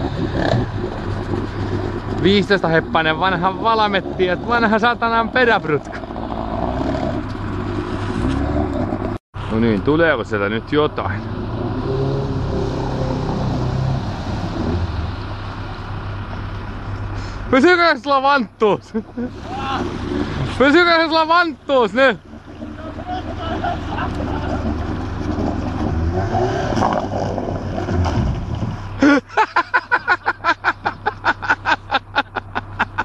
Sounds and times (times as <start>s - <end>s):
Boat, Water vehicle: 0.0s - 8.1s, 8.8s - 26.1s, 26.7s - 33.0s
Speech: 2.2s - 5.9s, 9.5s - 11.2s, 17.5s - 18.9s, 20.5s - 23.6s.